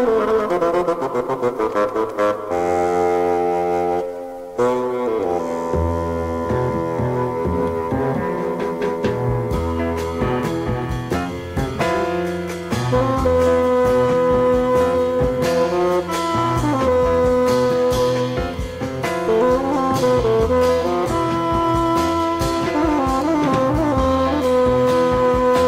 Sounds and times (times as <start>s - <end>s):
Didgeridoo: 0.0s - 25.6s.